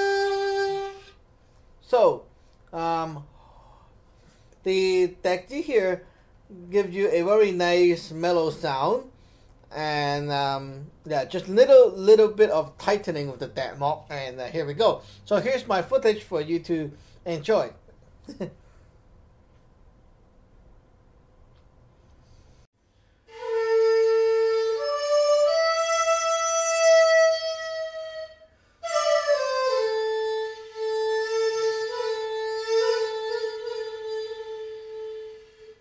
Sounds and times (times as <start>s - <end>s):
Flute: 0.0s - 1.2s, 23.3s - 35.8s
Inside, small room: 0.0s - 35.8s.